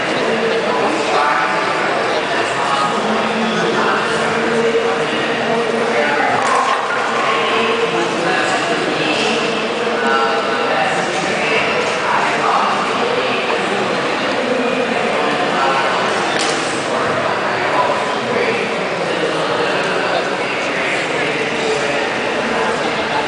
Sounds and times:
Speech: 0.0 - 23.2.

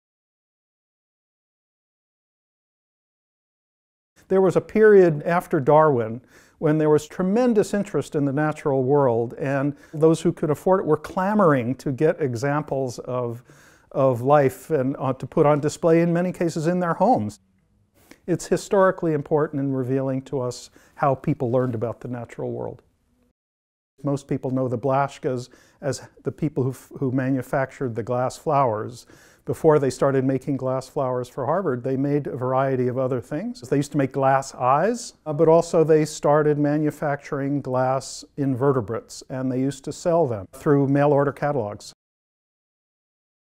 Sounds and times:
Speech: 4.3 - 17.4, 18.3 - 22.8, 24.0 - 42.0.

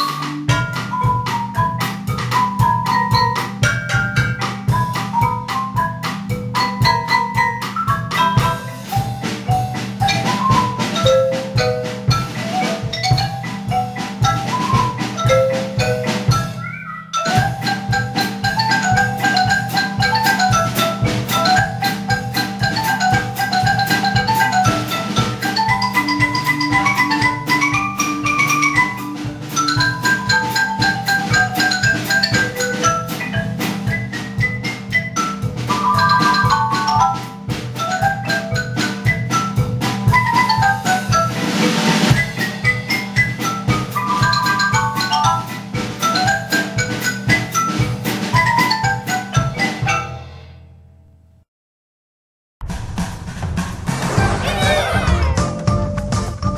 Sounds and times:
Drum: 0.0 - 50.7, 52.6 - 56.5
Drum kit: 0.0 - 50.7, 52.6 - 56.5
Marimba, xylophone: 0.0 - 50.7, 54.2 - 56.5.

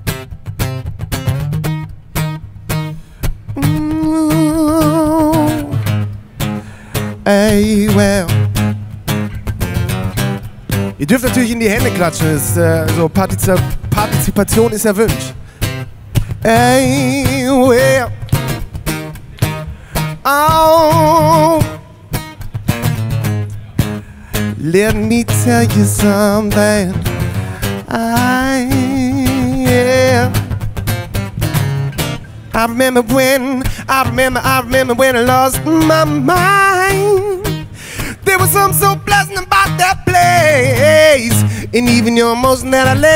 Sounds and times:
Music: 0.0 - 43.1.

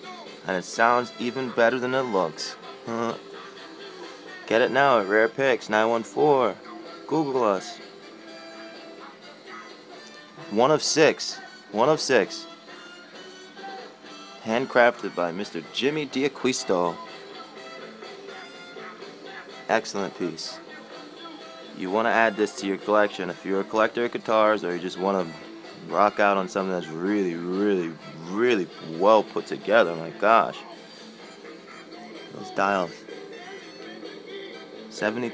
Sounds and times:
Speech: 0.5 - 3.2, 4.5 - 7.8, 10.4 - 12.4, 14.4 - 17.0, 19.7 - 20.6, 21.8 - 30.7, 32.3 - 33.0, 35.0 - 35.3.

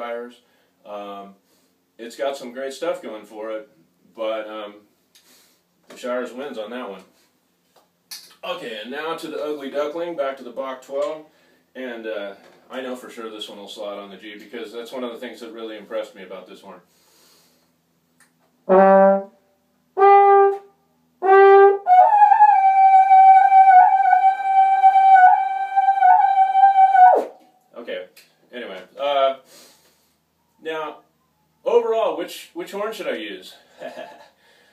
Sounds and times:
Trombone: 18.7 - 19.4, 20.0 - 27.4.

